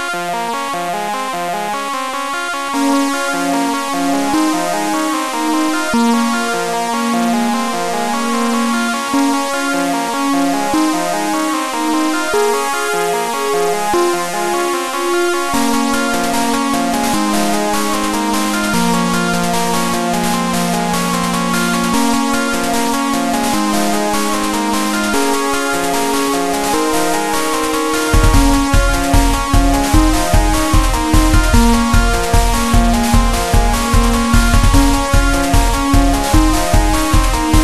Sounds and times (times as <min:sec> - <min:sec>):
Video game music: 0:00.0 - 0:37.6.